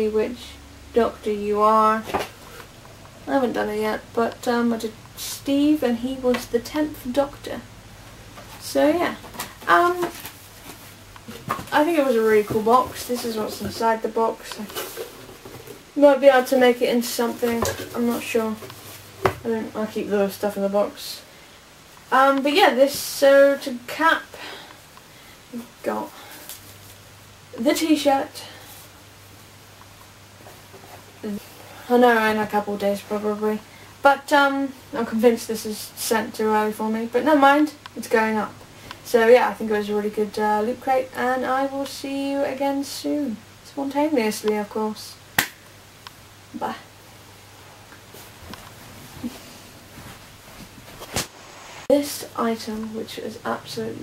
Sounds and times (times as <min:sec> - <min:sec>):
Speech: 0:00.0 - 0:02.2, 0:03.3 - 0:07.7, 0:08.6 - 0:10.2, 0:11.6 - 0:14.8, 0:16.0 - 0:18.7, 0:19.4 - 0:21.3, 0:22.1 - 0:24.4, 0:25.5 - 0:26.2, 0:27.6 - 0:28.6, 0:31.2 - 0:45.2, 0:46.5 - 0:46.9, 0:51.9 - 0:54.0.